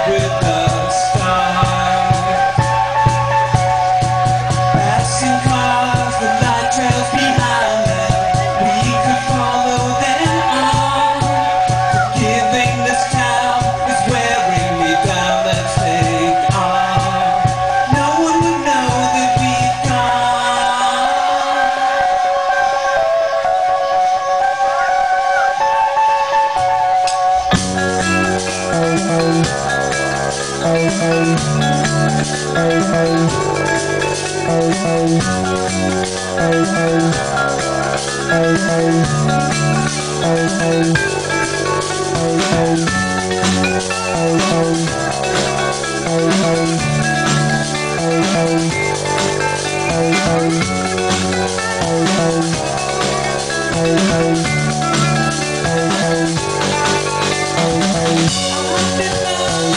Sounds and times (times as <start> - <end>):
Music: 0.0 - 59.7.